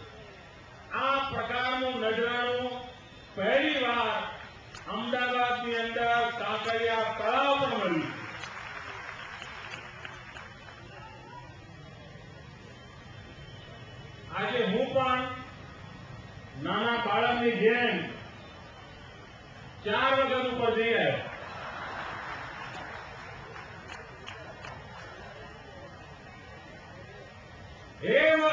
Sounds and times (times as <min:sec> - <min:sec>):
Male speech, man speaking: 0:00.9 - 0:08.2, 0:14.3 - 0:15.5, 0:16.6 - 0:18.2, 0:19.8 - 0:21.3, 0:28.0 - 0:28.5.